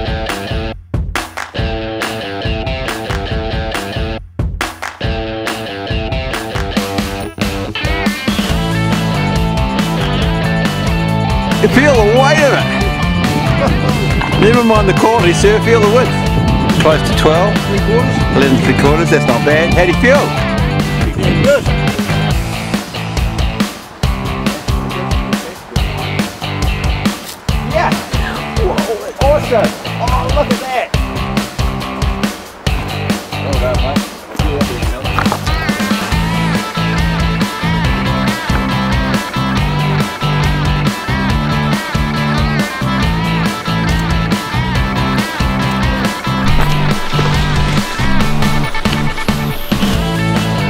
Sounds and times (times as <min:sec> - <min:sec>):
Music: 0:00.0 - 0:50.7
Speech: 0:11.6 - 0:12.8, 0:14.4 - 0:16.2, 0:16.8 - 0:20.4, 0:27.7 - 0:31.0, 0:33.4 - 0:35.2.